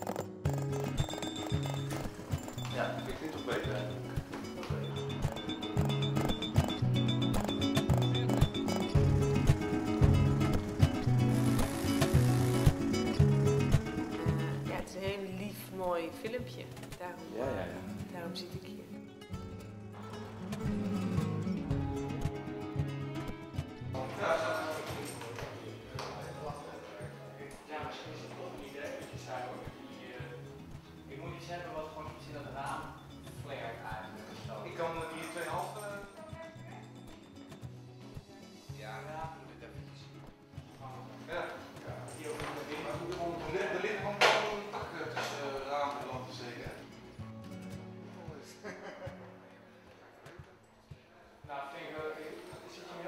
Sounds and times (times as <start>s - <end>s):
Music: 0.0s - 53.0s.